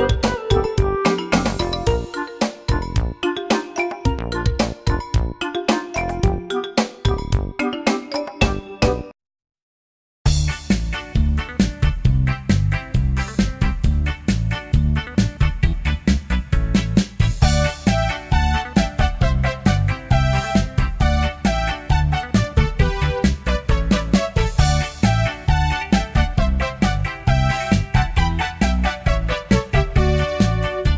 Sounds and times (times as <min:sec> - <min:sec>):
Music: 0:00.0 - 0:09.2, 0:10.3 - 0:30.9.